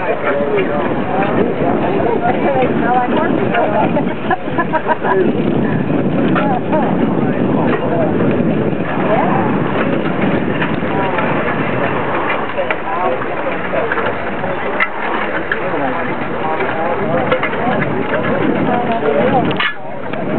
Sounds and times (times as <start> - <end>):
Speech: 0.0 - 20.3.